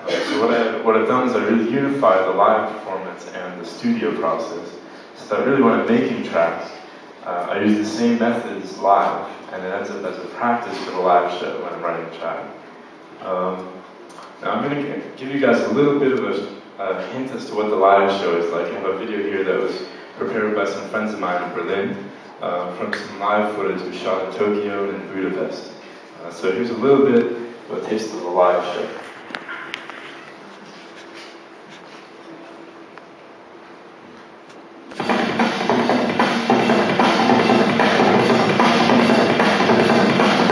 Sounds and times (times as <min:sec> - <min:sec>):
Speech: 0:00.0 - 0:12.6, 0:13.2 - 0:29.7.